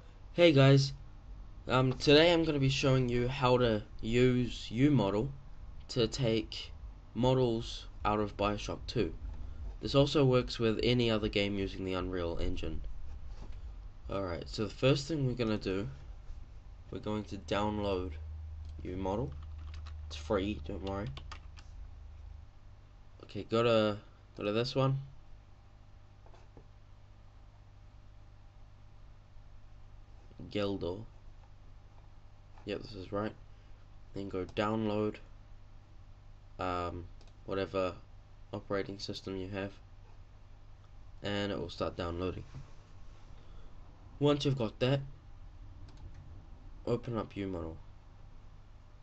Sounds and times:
Speech: 0:00.4 - 0:01.0, 0:01.7 - 0:09.2, 0:09.8 - 0:12.9, 0:14.1 - 0:16.0, 0:16.9 - 0:18.2, 0:18.8 - 0:19.4, 0:20.1 - 0:21.2, 0:23.2 - 0:25.1, 0:30.4 - 0:31.1, 0:32.6 - 0:33.4, 0:34.2 - 0:35.3, 0:36.6 - 0:39.8, 0:41.2 - 0:42.6, 0:44.2 - 0:45.1, 0:46.9 - 0:47.8.

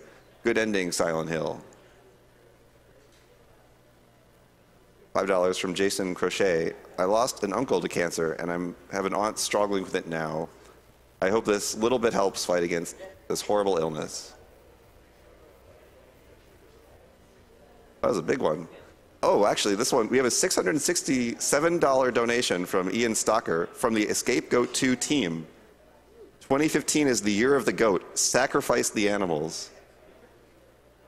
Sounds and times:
Speech: 0:00.0 - 0:04.1, 0:05.0 - 0:10.6, 0:11.2 - 0:31.0.

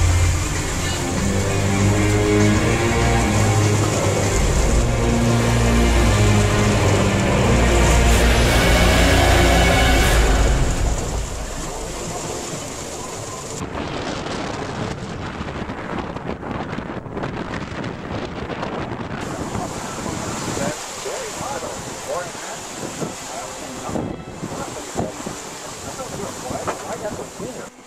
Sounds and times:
Music: 0:00.0 - 0:13.4, 0:22.8 - 0:27.8
Boat, Water vehicle: 0:00.0 - 0:27.8
Outside, rural or natural: 0:00.0 - 0:27.8
Speech: 0:19.2 - 0:27.8.

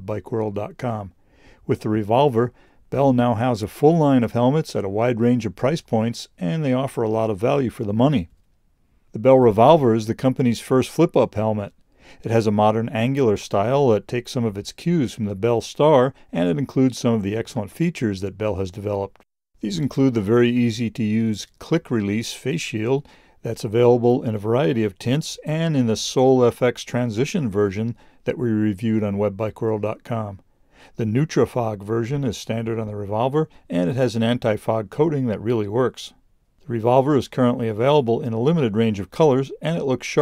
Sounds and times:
Speech: 0:00.0 - 0:08.3, 0:09.2 - 0:30.4, 0:31.0 - 0:40.2.

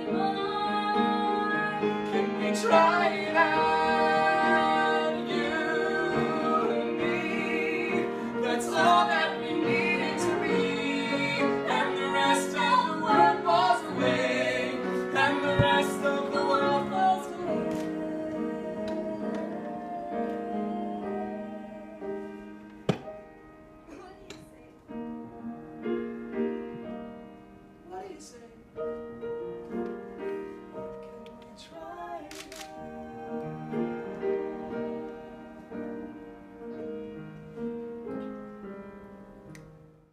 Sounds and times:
Classical music: 0:00.0 - 0:40.1.

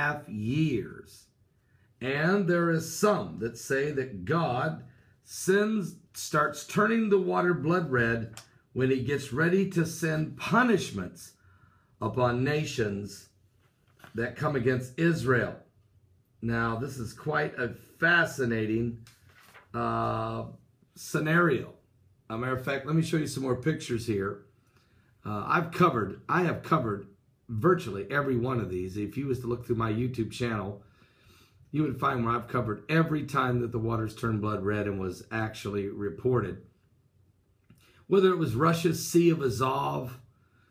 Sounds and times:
Speech: 0:00.0 - 0:01.4, 0:02.0 - 0:11.4, 0:12.0 - 0:13.4, 0:14.1 - 0:15.7, 0:16.4 - 0:19.1, 0:19.7 - 0:24.4, 0:25.2 - 0:30.8, 0:31.7 - 0:36.7, 0:38.1 - 0:40.2.

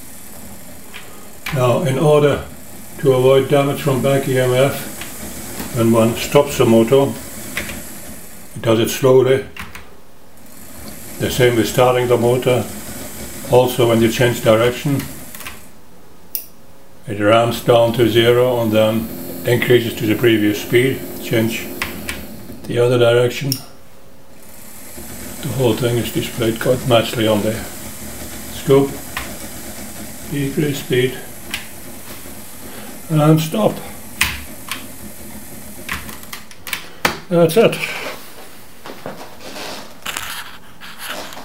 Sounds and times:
Speech: 0:01.5 - 0:04.9, 0:05.7 - 0:07.2, 0:08.6 - 0:09.6, 0:11.2 - 0:12.7, 0:13.5 - 0:15.1, 0:17.1 - 0:21.8, 0:22.7 - 0:23.7, 0:25.4 - 0:27.8, 0:28.5 - 0:29.0, 0:30.3 - 0:31.3, 0:33.1 - 0:34.0, 0:37.3 - 0:38.2.

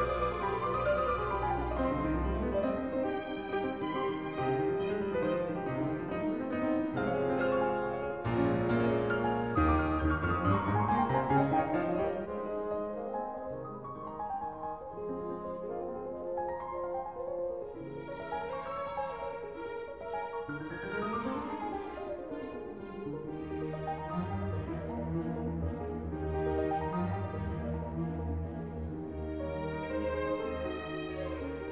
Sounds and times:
Music: 0:00.0 - 0:31.7.

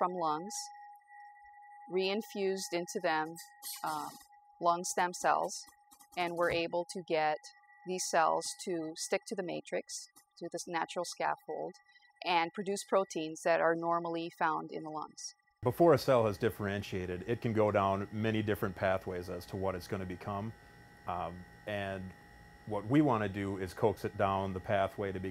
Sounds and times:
Speech: 0:00.0 - 0:00.7, 0:01.9 - 0:05.6, 0:06.2 - 0:20.5, 0:21.1 - 0:22.1, 0:22.7 - 0:25.3.

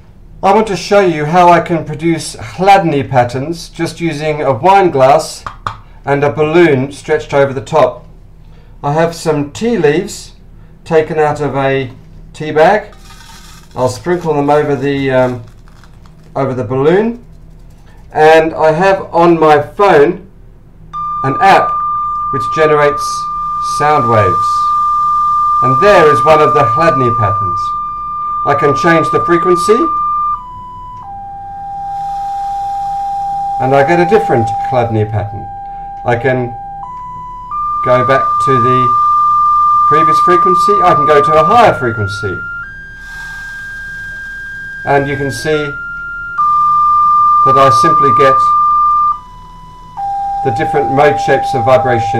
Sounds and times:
Speech: 0:00.4 - 0:05.5, 0:06.1 - 0:08.0, 0:08.8 - 0:12.9, 0:13.8 - 0:15.5, 0:16.4 - 0:17.2, 0:18.1 - 0:20.3, 0:21.2 - 0:24.7, 0:25.6 - 0:27.8, 0:28.4 - 0:30.0, 0:33.6 - 0:36.6, 0:37.8 - 0:39.0, 0:39.9 - 0:42.5, 0:44.9 - 0:45.8, 0:47.4 - 0:48.6, 0:50.4 - 0:52.1.

